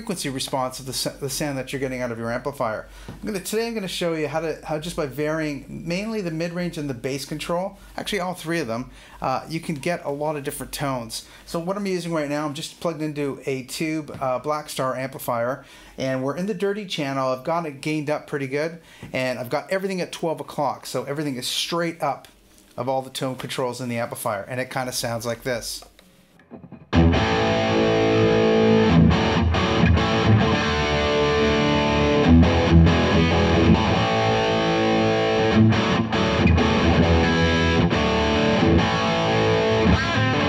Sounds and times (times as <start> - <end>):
Speech: 0.0 - 25.9.